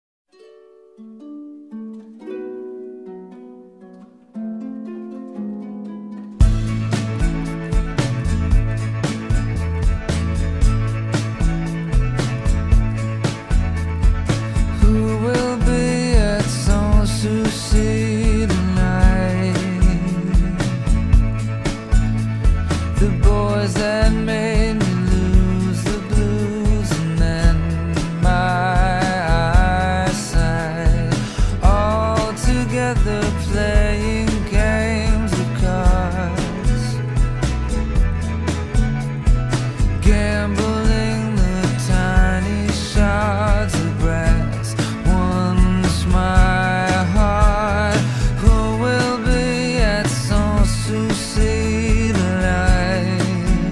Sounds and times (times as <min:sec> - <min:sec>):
Harp: 0:00.3 - 0:53.7.